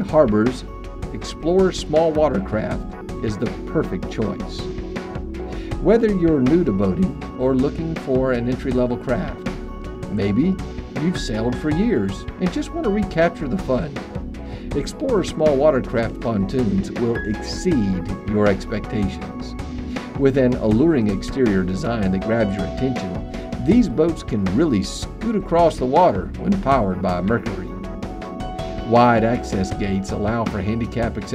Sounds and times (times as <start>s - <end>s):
Speech: 0.0s - 4.7s, 5.8s - 9.4s, 10.1s - 14.0s, 14.7s - 19.6s, 20.2s - 27.7s, 28.9s - 31.3s
Music: 0.0s - 31.3s.